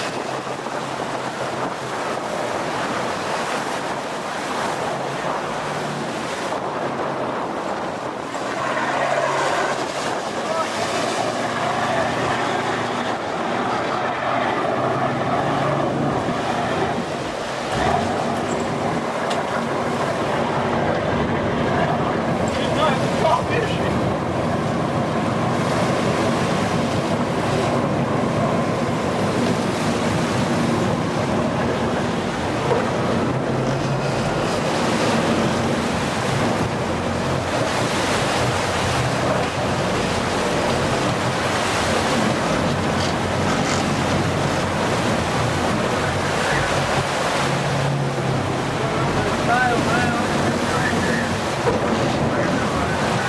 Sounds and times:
Sailboat, sailing ship: 0.0s - 53.2s
Speech: 10.4s - 11.0s, 21.7s - 24.0s, 48.8s - 53.2s.

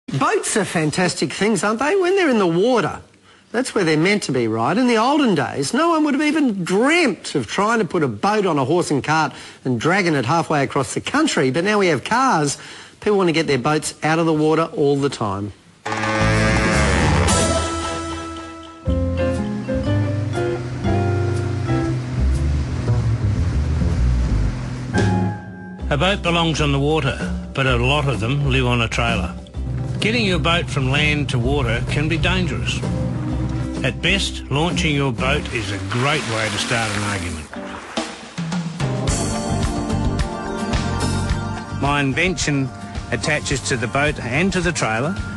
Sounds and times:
Speech: 0.1s - 15.6s, 25.9s - 29.4s, 30.0s - 32.8s, 33.8s - 37.5s, 41.8s - 45.2s.

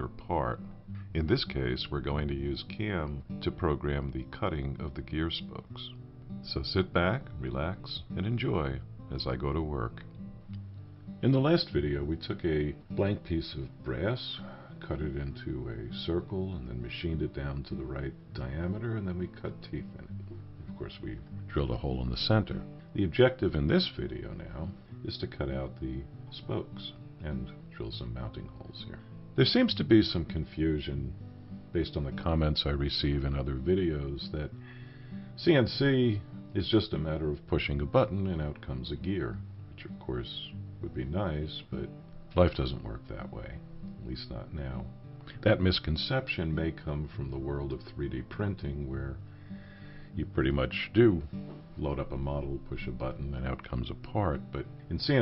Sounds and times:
Speech: 0.0s - 10.1s, 11.2s - 34.6s, 35.4s - 49.2s, 50.1s - 55.2s
Music: 0.0s - 55.2s.

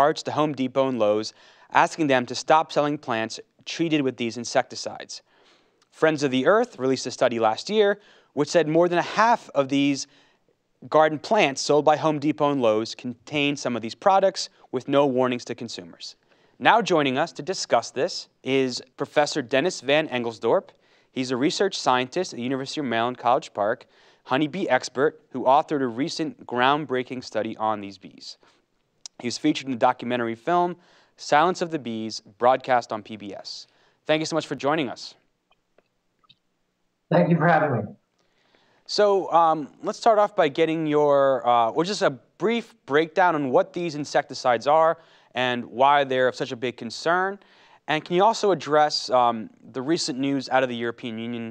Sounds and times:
Speech: 0.0s - 5.3s, 5.9s - 10.1s, 10.8s - 28.4s, 29.1s - 35.2s, 37.1s - 38.0s, 38.9s - 51.5s.

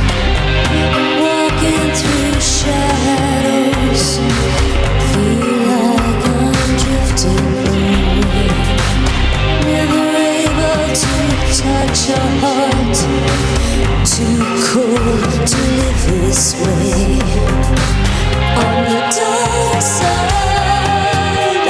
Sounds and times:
Music: 0.0s - 21.6s.

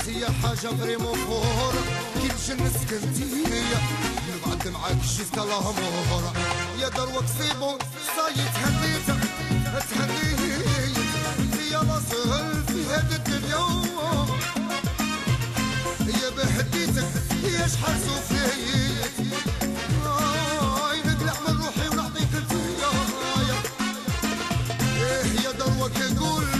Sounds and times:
Music: 0.0s - 26.5s.

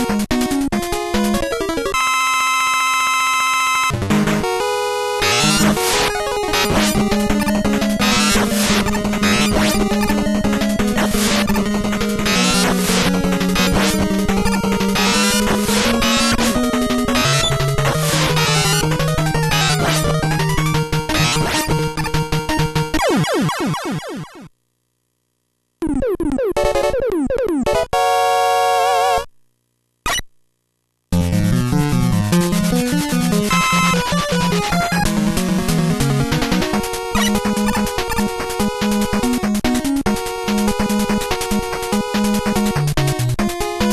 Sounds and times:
Music: 0.0s - 2.0s, 3.9s - 23.0s, 31.1s - 43.9s.

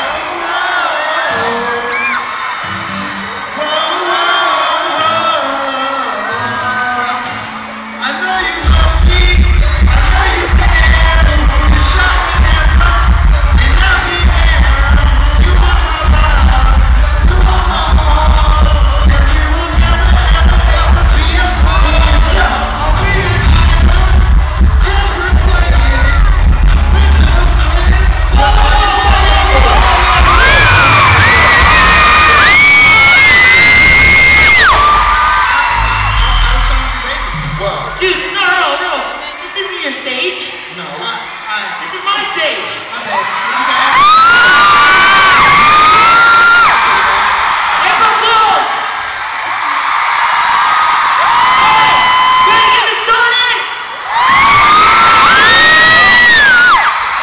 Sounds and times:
Male singing: 0.0s - 2.2s, 3.6s - 30.6s
Music: 0.0s - 38.9s
Speech: 36.5s - 44.0s.

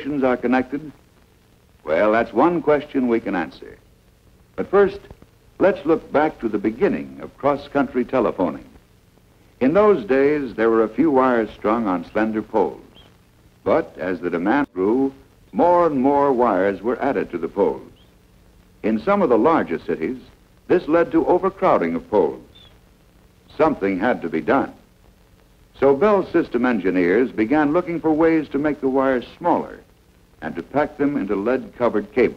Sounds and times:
Speech: 0.0s - 1.0s, 1.8s - 3.8s, 4.6s - 8.8s, 9.6s - 18.0s, 18.8s - 22.7s, 23.5s - 24.9s, 25.8s - 32.3s.

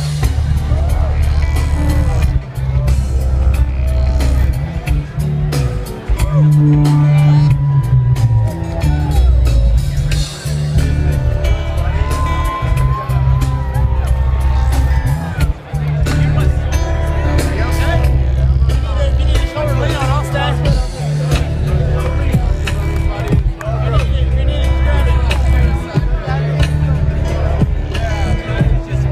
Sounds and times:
Music: 0.0s - 29.1s
Speech: 4.5s - 7.6s, 11.5s - 29.1s.

